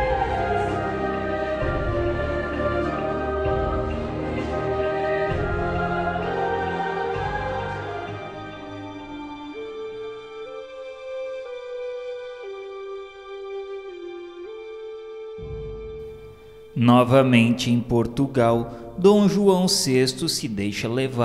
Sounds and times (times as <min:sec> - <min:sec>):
Music: 0:00.0 - 0:21.2
Speech: 0:16.8 - 0:21.2.